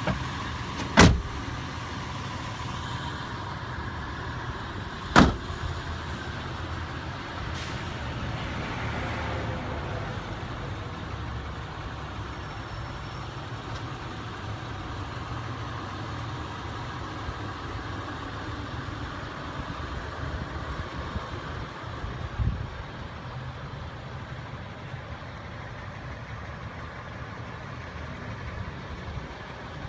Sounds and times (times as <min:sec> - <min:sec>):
Car: 0:00.0 - 0:29.8.